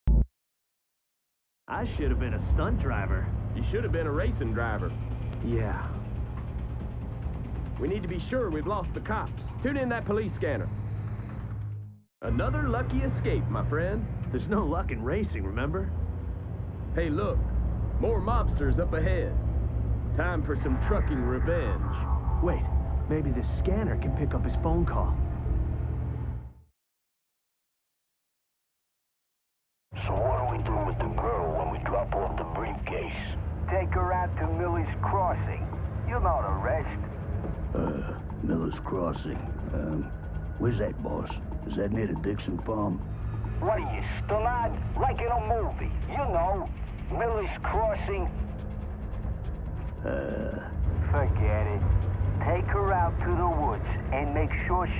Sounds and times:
Speech: 1.7 - 6.0, 7.8 - 10.7, 12.2 - 15.9, 17.0 - 17.4, 18.0 - 19.4, 20.1 - 25.2, 30.0 - 37.0, 37.7 - 43.0, 43.6 - 48.4, 50.0 - 51.8, 52.4 - 54.9.

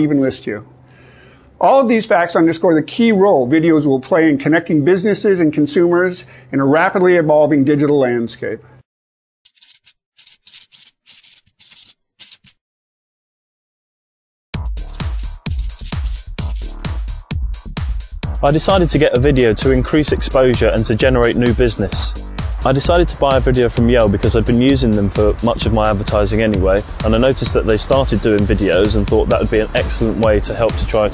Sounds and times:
Speech: 0.0 - 0.7, 1.6 - 8.7, 18.4 - 31.1.

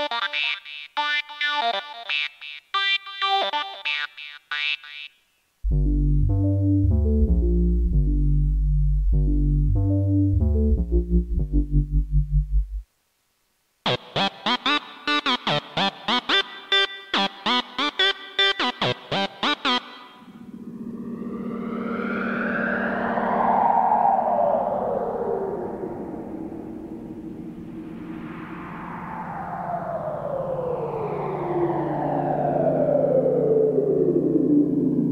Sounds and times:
Synthesizer: 5.7 - 12.8, 14.2 - 35.1.

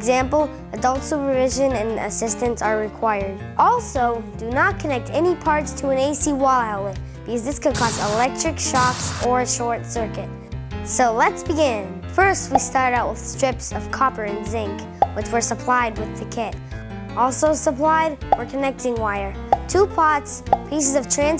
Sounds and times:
Speech: 0.0 - 10.3, 10.9 - 16.6, 17.2 - 21.3
Music: 0.0 - 21.3.

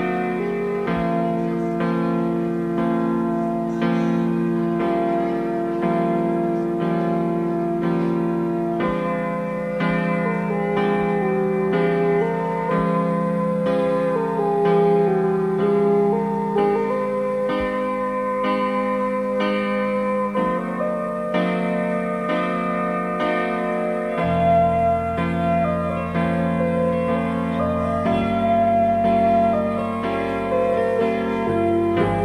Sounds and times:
Music: 0.0 - 32.2.

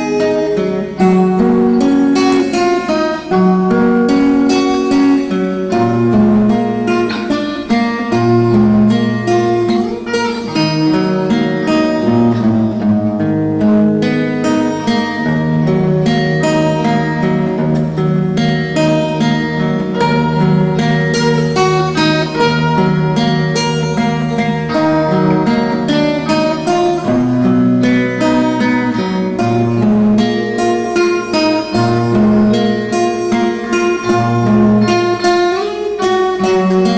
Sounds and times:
Acoustic guitar: 0.0 - 36.9.

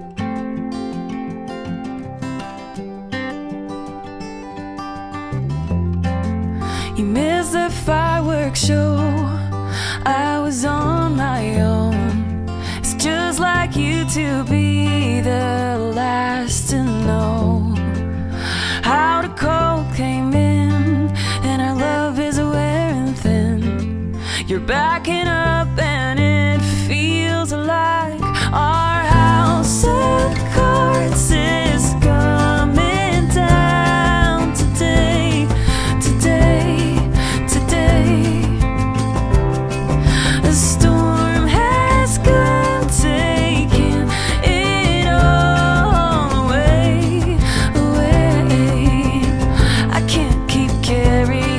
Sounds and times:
Music: 0.0 - 51.5.

